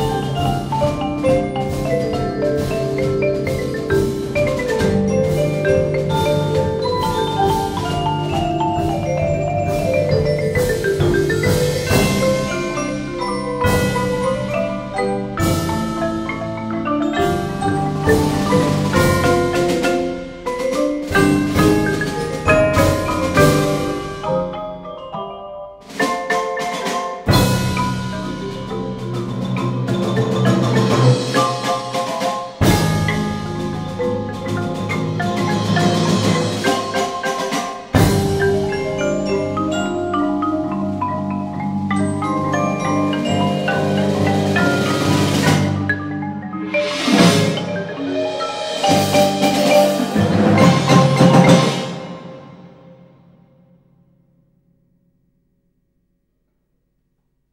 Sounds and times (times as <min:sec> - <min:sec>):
Glockenspiel: 0:00.0 - 0:52.7
Marimba, xylophone: 0:00.0 - 0:53.0.